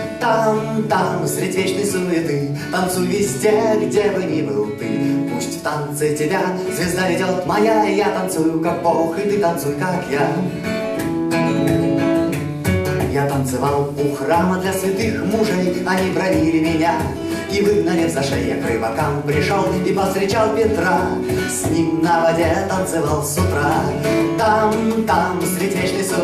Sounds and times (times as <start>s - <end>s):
Music: 0.0s - 26.2s.